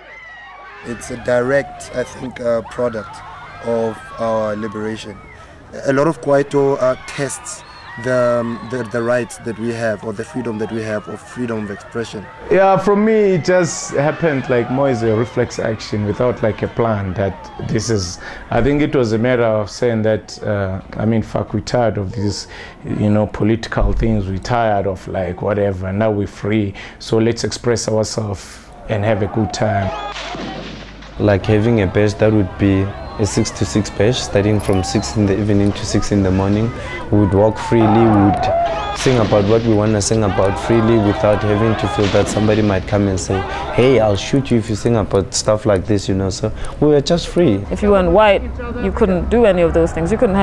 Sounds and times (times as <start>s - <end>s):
Speech: 0.8s - 5.2s, 5.8s - 29.9s, 31.2s - 50.4s.